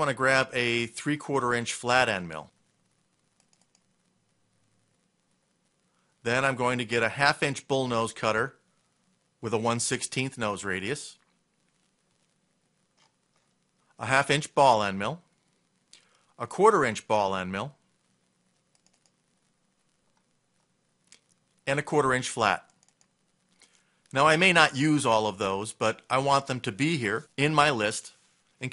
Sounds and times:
Speech: 0.0s - 2.5s, 6.2s - 8.6s, 9.4s - 11.2s, 14.0s - 15.3s, 16.4s - 17.8s, 21.6s - 22.7s, 24.1s - 28.7s
Inside, small room: 0.0s - 28.7s.

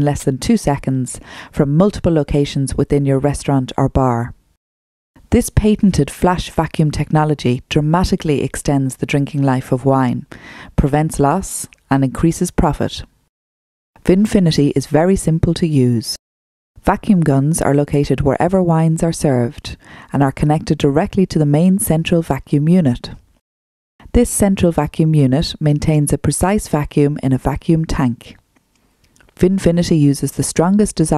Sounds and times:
Speech: 0.0s - 4.4s, 5.3s - 13.1s, 14.0s - 16.2s, 16.8s - 23.2s, 24.1s - 28.4s, 29.4s - 31.1s.

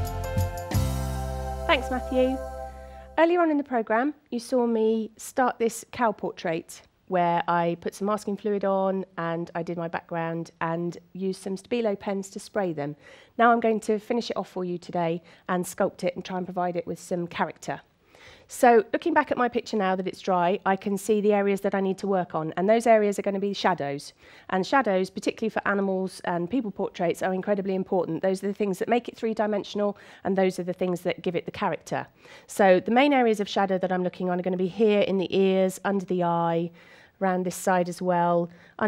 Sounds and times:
Speech: 1.7s - 2.4s, 3.2s - 17.9s, 18.5s - 38.8s.

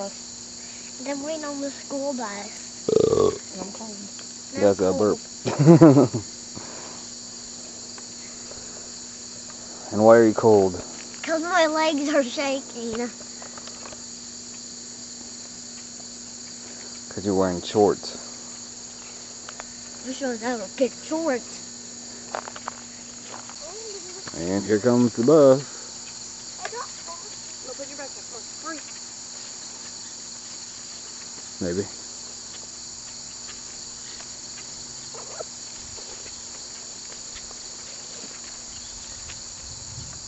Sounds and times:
Cricket: 0.0s - 40.2s.

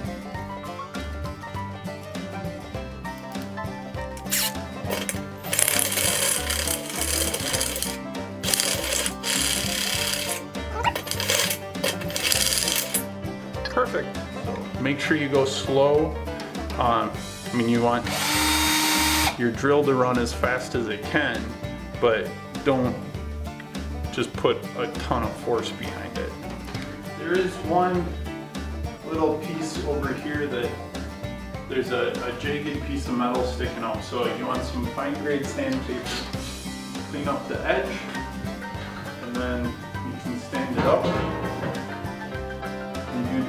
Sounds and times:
Music: 0.0s - 43.4s
Speech: 13.7s - 14.2s, 14.8s - 16.1s, 16.8s - 18.1s, 19.4s - 23.0s, 24.1s - 26.4s, 27.2s - 28.2s, 29.0s - 30.8s, 31.7s - 36.4s, 37.1s - 38.1s, 39.2s - 41.3s, 43.1s - 43.4s.

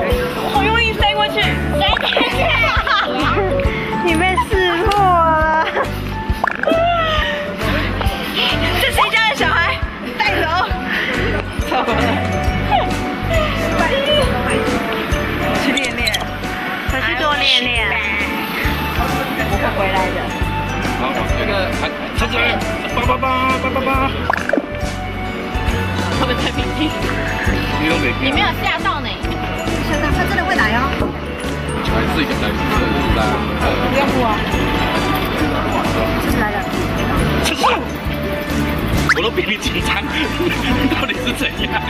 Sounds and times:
Music: 0.0s - 41.9s.

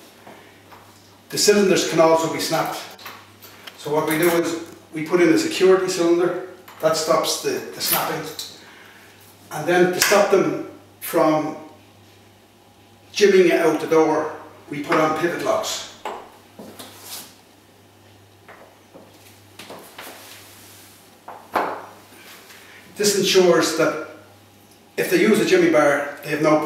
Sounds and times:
Speech: 1.3s - 3.0s, 3.8s - 8.6s, 9.5s - 11.8s, 13.1s - 16.0s, 23.0s - 24.2s, 25.0s - 26.6s.

